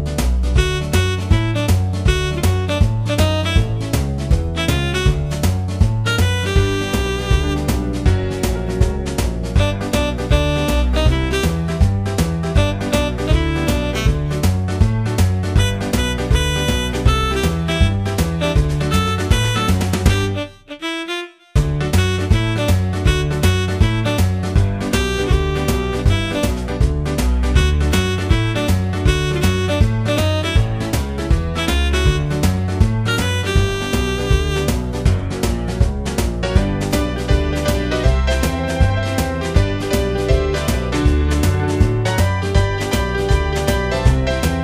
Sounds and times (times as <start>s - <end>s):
Musical instrument: 0.5s - 8.8s, 9.5s - 14.6s, 15.5s - 26.8s, 27.5s - 35.1s.